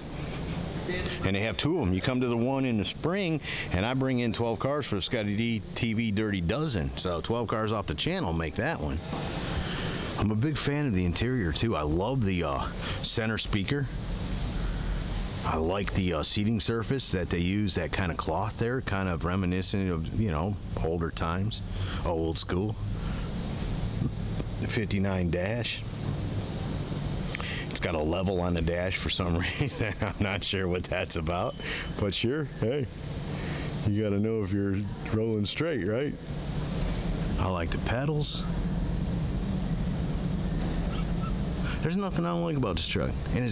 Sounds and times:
Vehicle: 0.0 - 43.5.

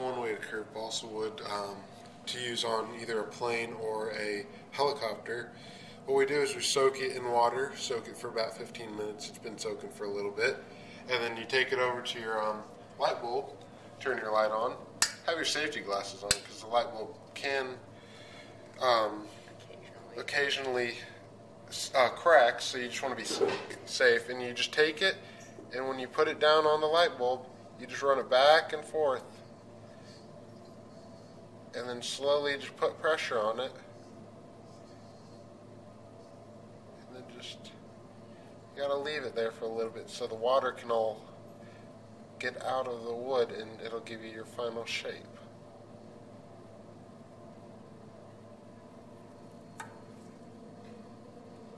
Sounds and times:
Speech: 0.0 - 17.9, 18.8 - 29.4, 31.7 - 33.9, 37.0 - 37.8, 38.8 - 41.3, 42.4 - 45.4.

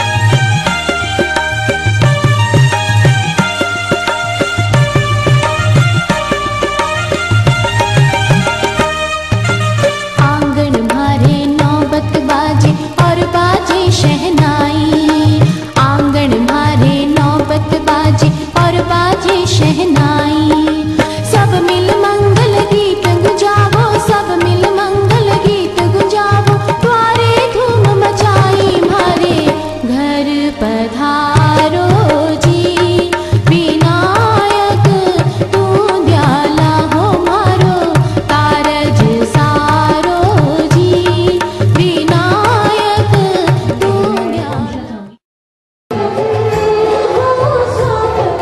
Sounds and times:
Music: 0.0 - 45.2, 45.9 - 48.4
Female singing: 10.2 - 45.2, 45.9 - 48.4.

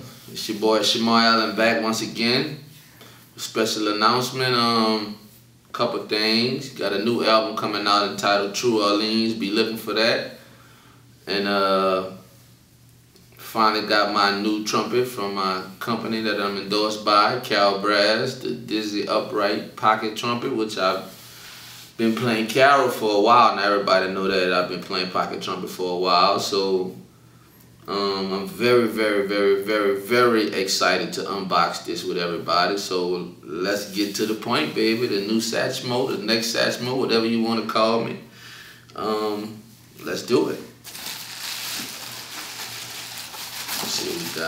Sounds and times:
Speech: 0.0 - 2.7, 3.4 - 10.4, 11.2 - 12.3, 13.4 - 21.2, 22.0 - 27.0, 27.8 - 38.3, 38.9 - 40.8, 43.8 - 44.4.

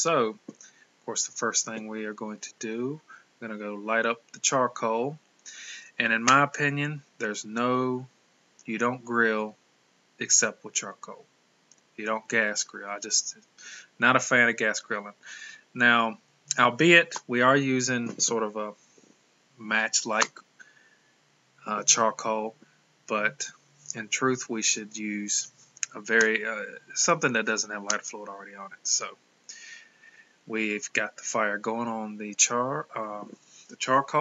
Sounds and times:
Speech: 0.0 - 0.5, 1.1 - 8.1, 8.7 - 9.6, 10.2 - 11.3, 12.0 - 18.8, 19.6 - 20.4, 21.6 - 29.8, 30.5 - 34.2.

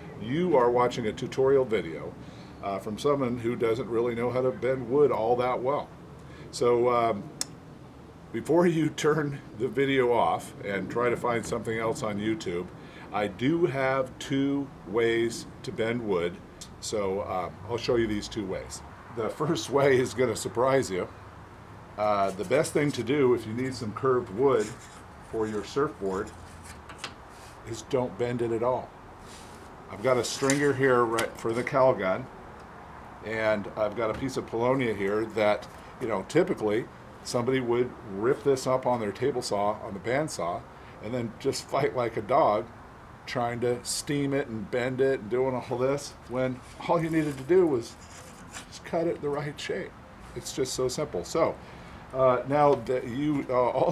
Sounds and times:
Speech: 0.2 - 5.9, 6.5 - 7.3, 8.3 - 21.1, 22.0 - 26.4, 27.7 - 28.9, 29.9 - 32.3, 33.2 - 42.7, 43.3 - 48.0, 48.7 - 53.9.

